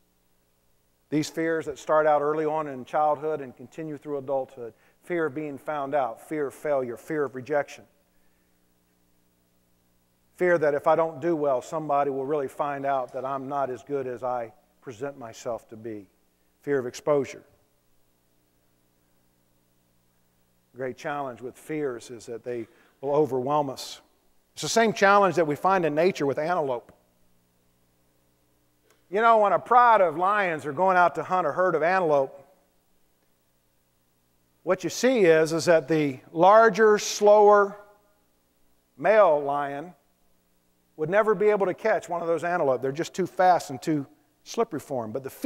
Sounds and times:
Speech: 1.2 - 7.9, 10.4 - 17.6, 20.8 - 27.0, 29.1 - 32.5, 34.7 - 37.9, 39.0 - 40.0, 41.0 - 45.4.

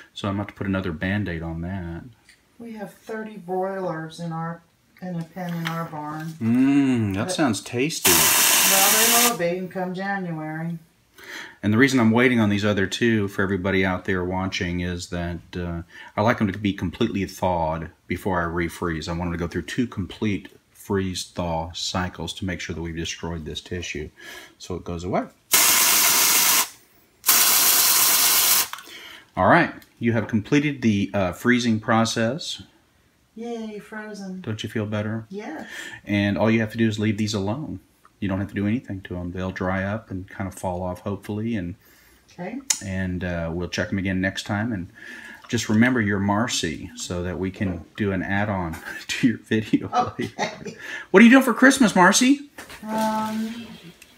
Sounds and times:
Inside, small room: 0.0 - 54.1.

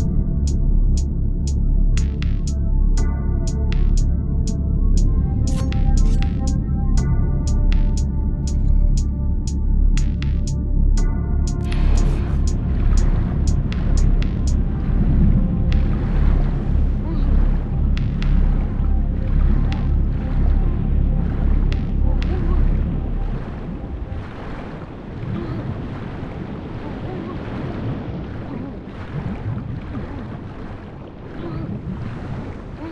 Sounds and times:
Music: 0.0 - 24.8.

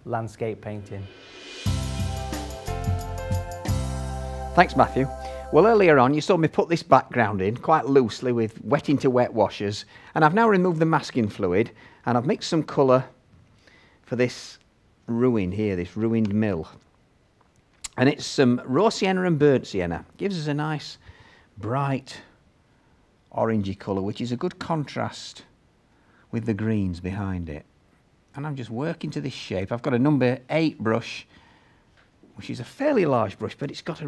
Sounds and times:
Speech: 0.0 - 1.1, 4.6 - 13.2, 14.1 - 16.8, 17.9 - 21.0, 21.6 - 22.3, 23.3 - 25.5, 26.3 - 27.7, 28.4 - 31.3, 32.4 - 34.0.

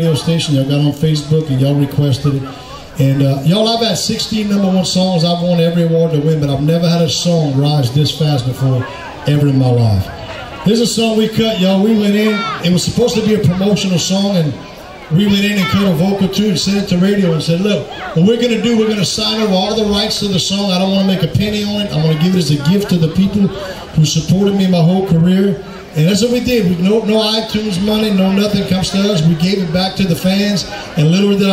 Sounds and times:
Speech: 0.0 - 31.5.

